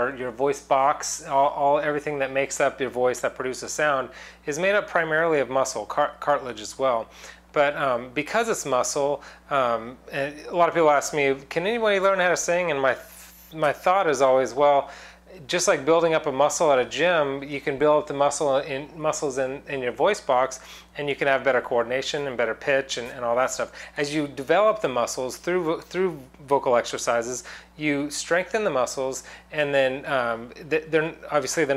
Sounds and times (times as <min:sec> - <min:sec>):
Speech: 0:00.0 - 0:31.7.